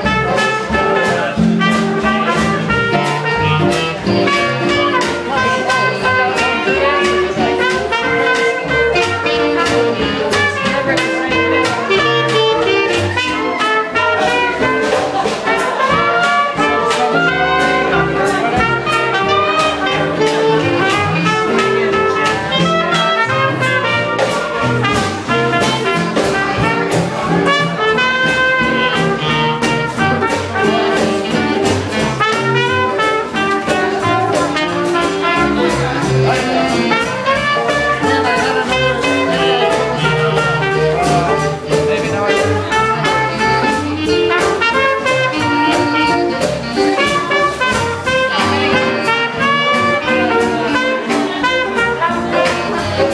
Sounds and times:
Jazz: 0:00.0 - 0:53.1
Swing music: 0:00.0 - 0:53.1.

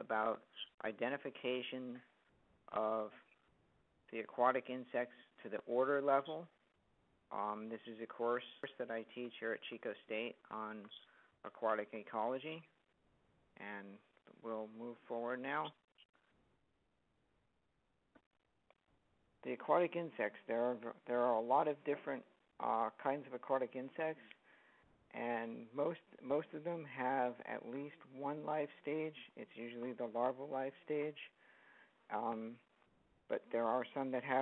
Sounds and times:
Speech: 0:00.0 - 0:02.1, 0:02.7 - 0:03.3, 0:04.1 - 0:06.5, 0:07.3 - 0:12.7, 0:13.6 - 0:15.8, 0:19.4 - 0:24.3, 0:25.1 - 0:31.4, 0:32.1 - 0:32.7, 0:33.3 - 0:34.4.

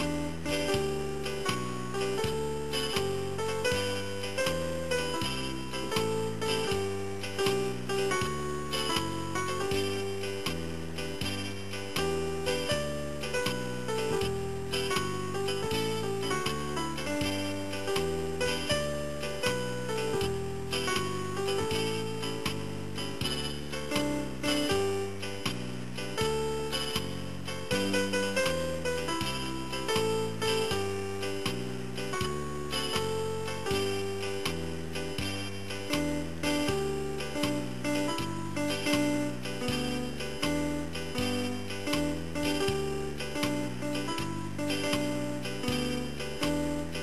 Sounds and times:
Music: 0:00.0 - 0:47.0.

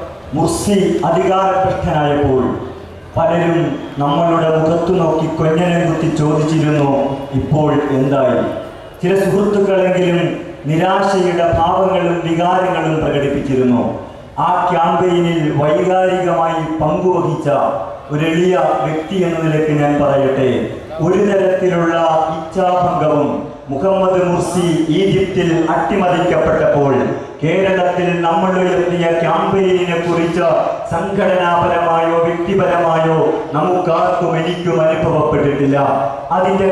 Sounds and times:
Male speech, man speaking: 0:00.0 - 0:36.7
Narration, monologue: 0:00.0 - 0:36.7.

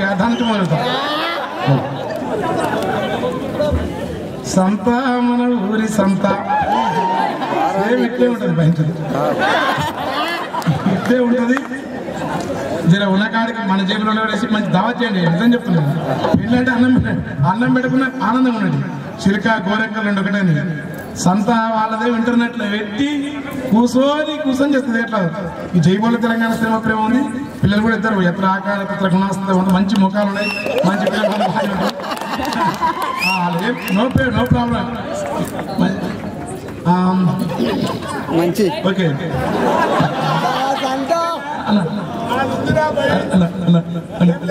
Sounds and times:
Male speech, man speaking: 0:00.0 - 0:01.0, 0:04.5 - 0:06.6, 0:07.6 - 0:09.4, 0:10.9 - 0:11.8, 0:12.9 - 0:31.9, 0:33.3 - 0:36.2, 0:36.8 - 0:37.6, 0:38.3 - 0:39.3, 0:40.7 - 0:44.5.

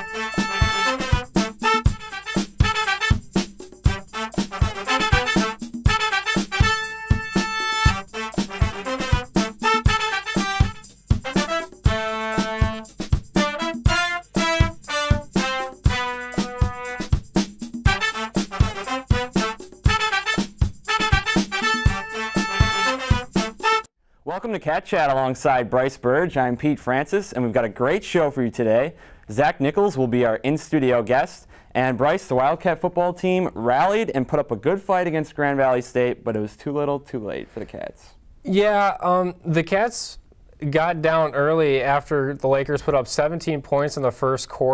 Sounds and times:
Music: 0:00.0 - 0:23.9
Speech: 0:24.3 - 0:44.7.

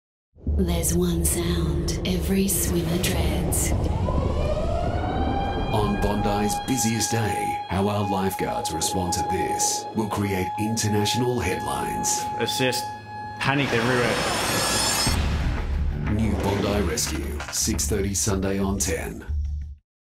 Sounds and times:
Music: 0:00.4 - 0:04.0, 0:05.7 - 0:19.8
Speech: 0:05.7 - 0:14.2, 0:16.1 - 0:19.3.

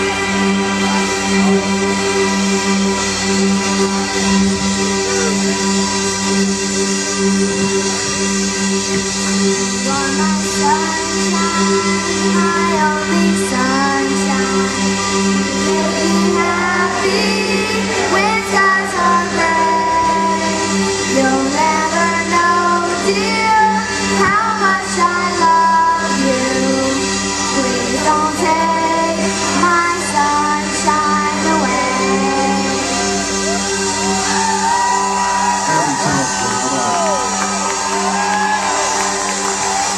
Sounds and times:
Music: 0:00.0 - 0:39.9
Child singing: 0:09.8 - 0:14.7, 0:15.6 - 0:32.9
Female singing: 0:09.8 - 0:14.7, 0:15.6 - 0:32.9.

